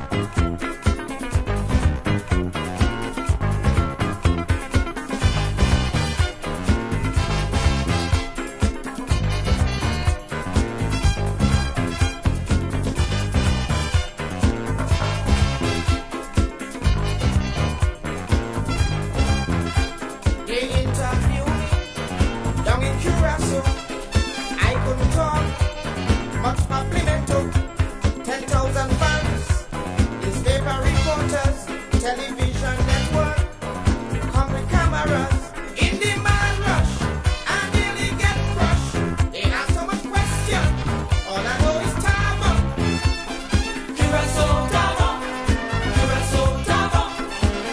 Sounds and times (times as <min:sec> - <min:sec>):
Music: 0:00.0 - 0:47.7.